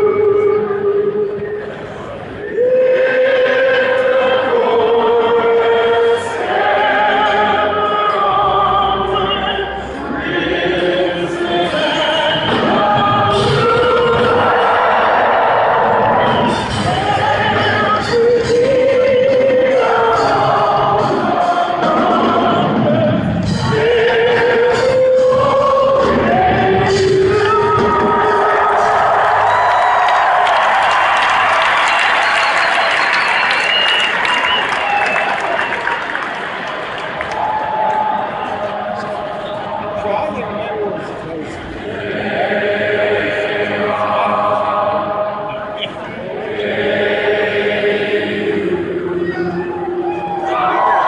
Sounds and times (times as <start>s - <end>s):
Mantra: 0.0s - 29.8s, 38.3s - 51.0s.